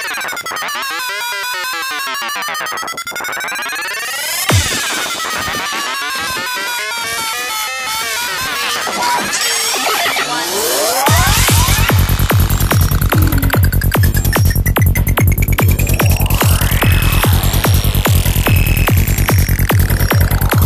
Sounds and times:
Cacophony: 0.0 - 20.6
Music: 0.0 - 20.6.

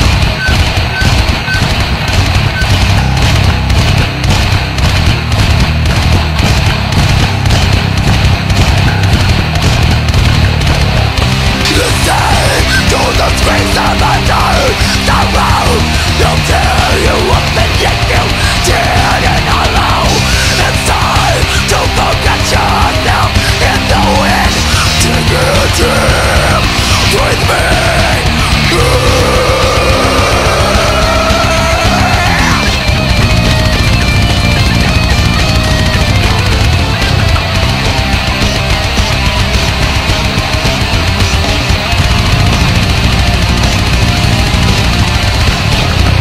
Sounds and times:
Angry music: 0.0 - 46.2
Guitar: 0.0 - 46.2
Heavy metal: 0.0 - 46.2
Singing: 11.6 - 32.8.

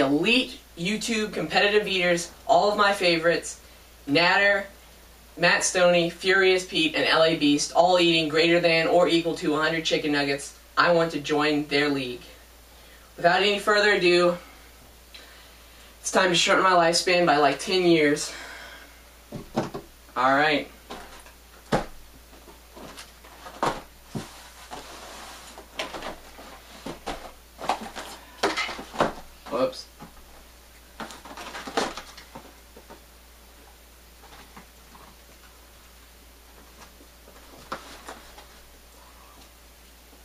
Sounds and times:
Speech: 0.0 - 4.8, 5.4 - 12.4, 13.2 - 14.5, 16.0 - 18.4, 20.2 - 20.7, 29.5 - 29.9.

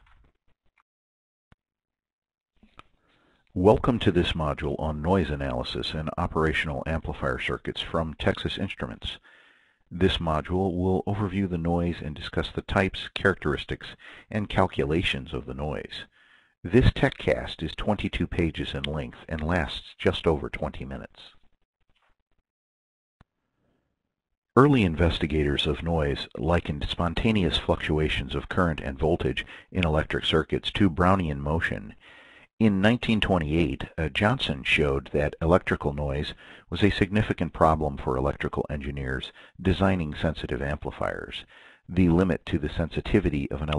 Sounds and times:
Speech: 3.6 - 9.3, 9.9 - 16.1, 16.7 - 21.4, 24.6 - 32.0, 32.6 - 43.7.

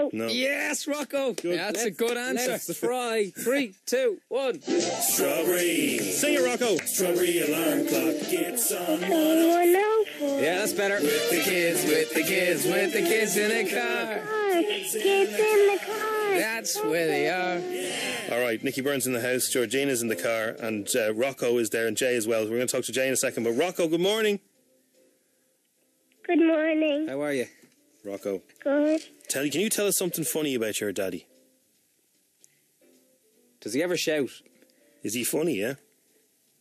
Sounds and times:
Speech: 0.1 - 4.6, 9.1 - 24.4, 35.1 - 35.8.

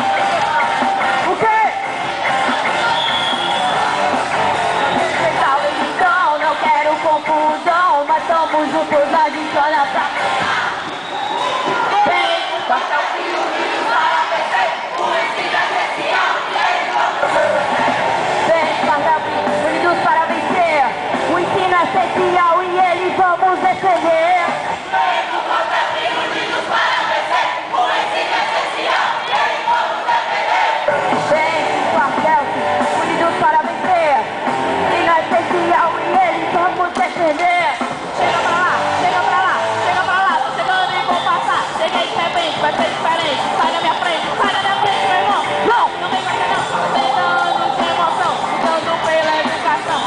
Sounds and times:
Cheering: 0.0 - 7.6, 8.4 - 22.2, 23.8 - 31.8.

